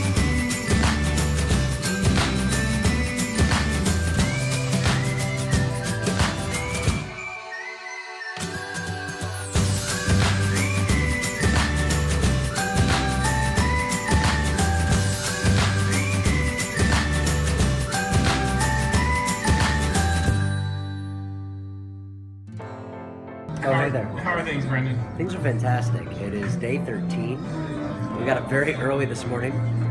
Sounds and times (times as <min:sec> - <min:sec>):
Music: 0:00.0 - 0:29.9
Speech: 0:23.6 - 0:27.4, 0:28.2 - 0:29.6.